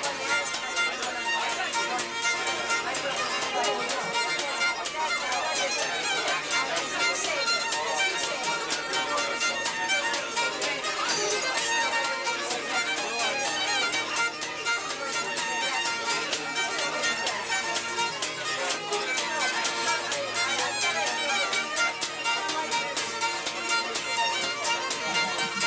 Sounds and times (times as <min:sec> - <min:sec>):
Violin, fiddle: 0:00.0 - 0:25.6.